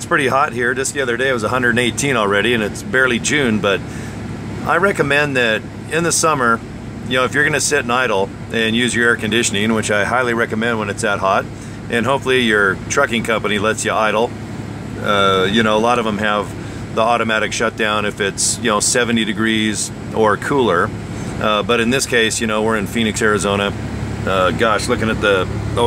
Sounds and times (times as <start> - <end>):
Speech: 0.0 - 3.9, 4.6 - 14.3, 15.0 - 25.8
Vehicle: 0.0 - 25.8.